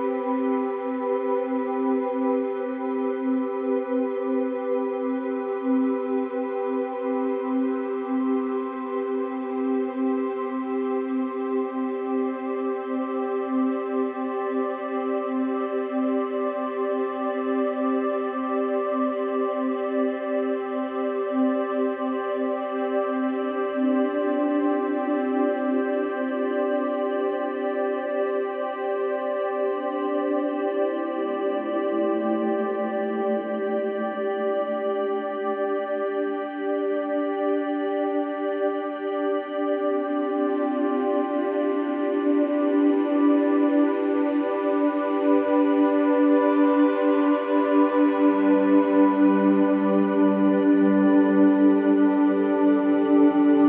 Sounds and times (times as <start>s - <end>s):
Music: 0.0s - 53.6s.